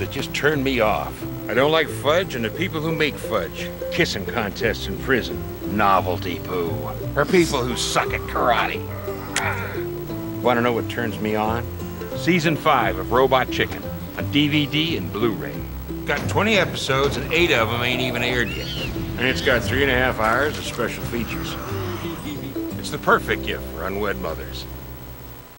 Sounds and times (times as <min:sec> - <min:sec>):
Speech: 0:00.0 - 0:08.8, 0:10.4 - 0:24.7
Music: 0:00.0 - 0:25.5.